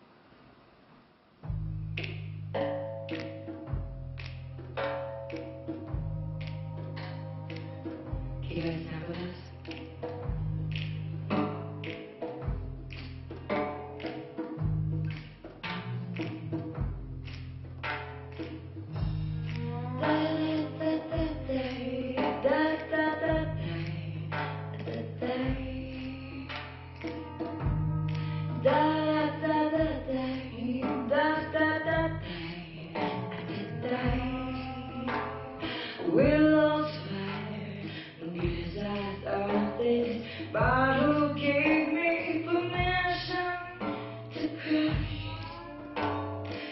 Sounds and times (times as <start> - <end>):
Music: 1.4 - 46.7
Speech: 8.4 - 9.7.